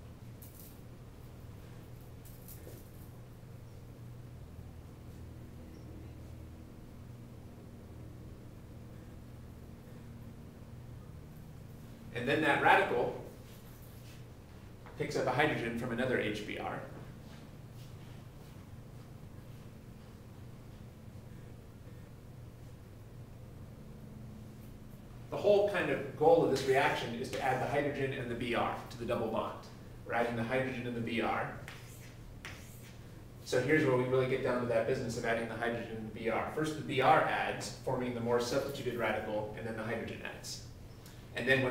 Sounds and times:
Speech: 12.1 - 13.3, 15.0 - 17.0, 25.3 - 31.7, 33.5 - 40.7, 41.4 - 41.7.

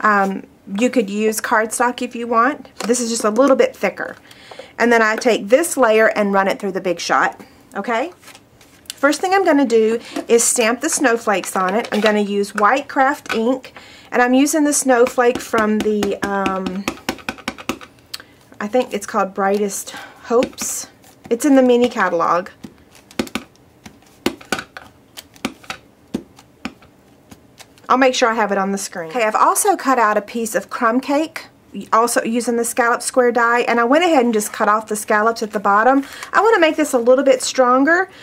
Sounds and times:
Speech: 0.0 - 4.2, 4.8 - 8.2, 8.9 - 16.9, 18.6 - 22.6, 27.9 - 38.1.

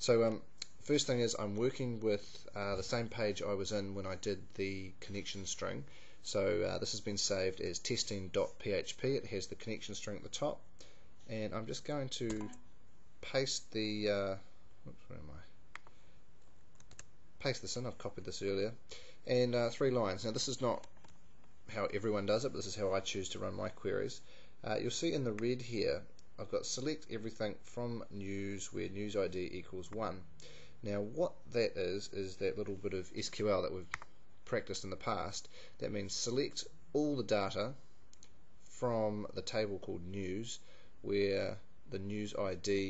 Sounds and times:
Speech: 0.0 - 10.7, 11.3 - 12.6, 13.2 - 15.6, 17.4 - 20.9, 21.7 - 37.8, 38.7 - 42.8.

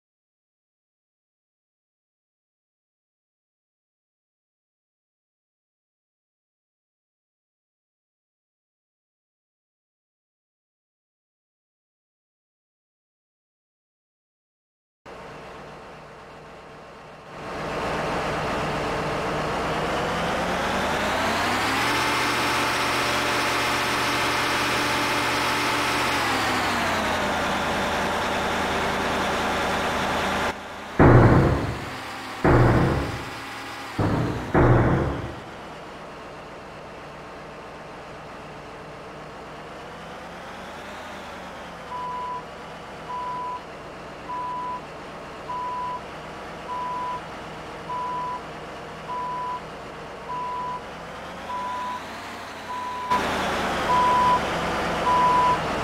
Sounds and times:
Truck: 15.1 - 55.8.

